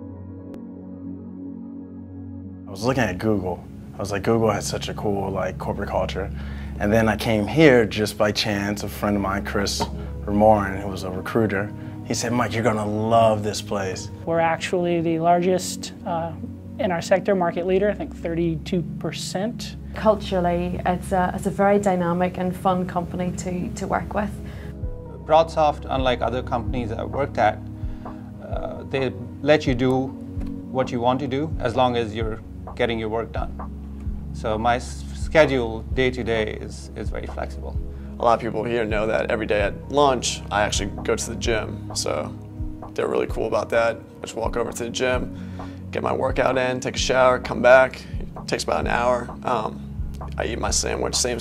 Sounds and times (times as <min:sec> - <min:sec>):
Music: 0:00.0 - 0:51.4.